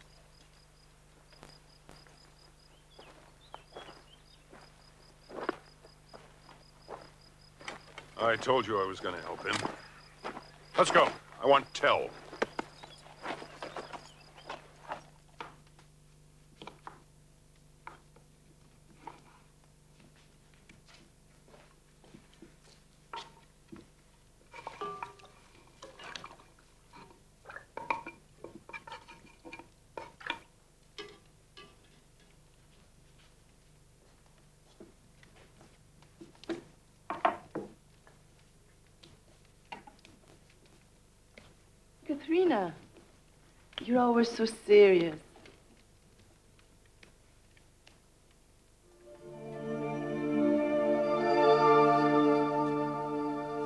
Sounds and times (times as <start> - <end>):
Speech: 8.2 - 9.8, 10.8 - 12.2, 42.0 - 42.9, 43.8 - 45.3.